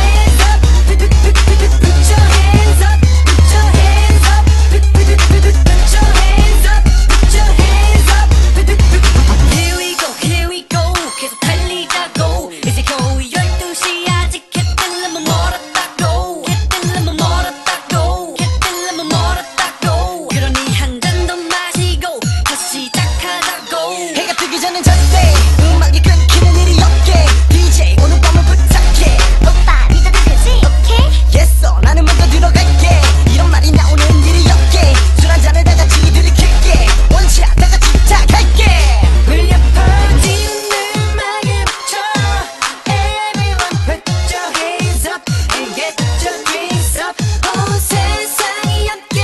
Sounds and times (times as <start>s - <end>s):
Pop music: 0.0s - 49.2s.